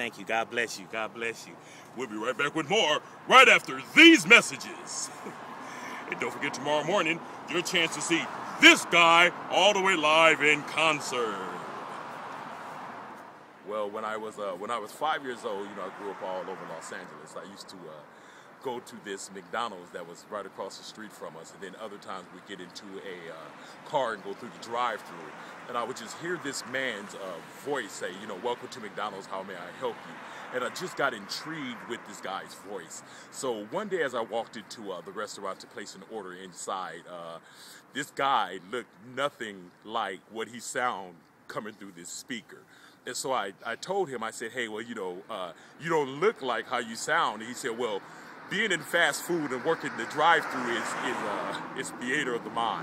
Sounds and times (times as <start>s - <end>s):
Speech: 0.0s - 5.2s, 6.0s - 11.7s, 13.6s - 52.8s.